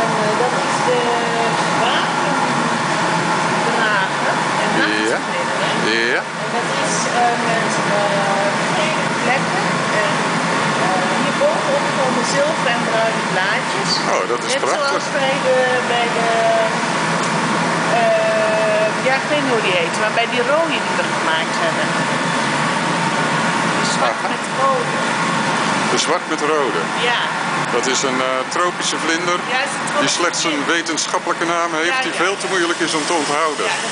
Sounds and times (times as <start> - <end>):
Speech: 3.8 - 10.2, 10.8 - 16.7, 23.8 - 24.9, 25.9 - 27.2, 27.8 - 33.9.